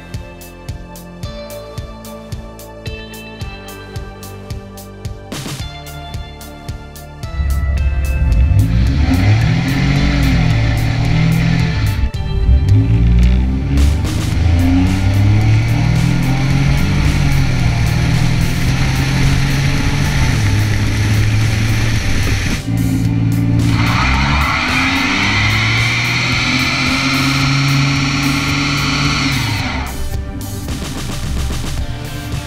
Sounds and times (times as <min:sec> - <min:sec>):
Vehicle: 0:07.2 - 0:32.4.